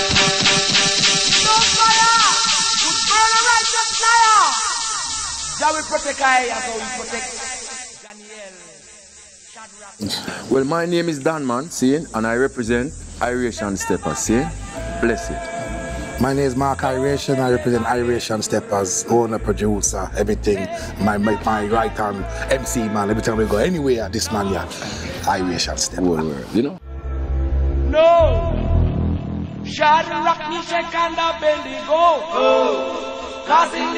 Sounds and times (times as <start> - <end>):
Speech: 10.0 - 15.4, 16.2 - 26.8.